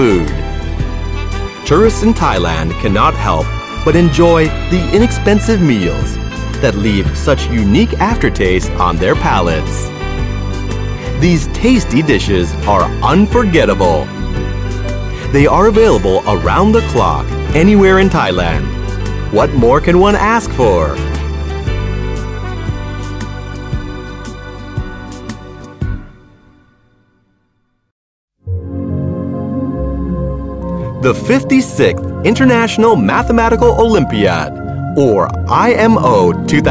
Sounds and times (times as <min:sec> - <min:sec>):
Speech: 0:00.0 - 0:00.4, 0:01.7 - 0:09.9, 0:11.2 - 0:14.1, 0:15.2 - 0:18.7, 0:19.3 - 0:21.0, 0:31.0 - 0:36.7
New-age music: 0:00.0 - 0:27.4, 0:28.4 - 0:36.7.